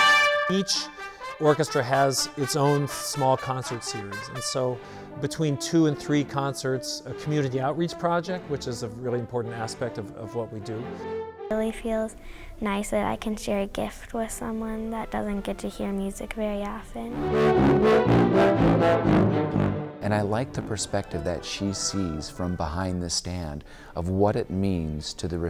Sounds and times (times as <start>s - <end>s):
Orchestra: 0.0s - 11.5s, 17.1s - 23.3s
Classical music: 0.0s - 12.0s, 16.9s - 23.1s
Speech: 0.5s - 10.9s, 11.5s - 17.2s, 20.0s - 25.5s
Violin, fiddle: 20.3s - 23.1s.